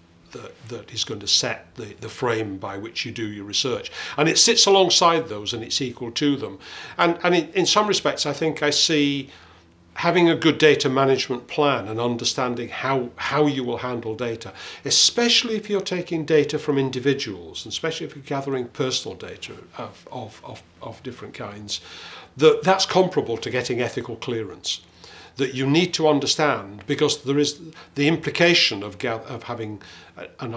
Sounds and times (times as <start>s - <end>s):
Speech: 0.3s - 9.3s, 10.0s - 30.5s.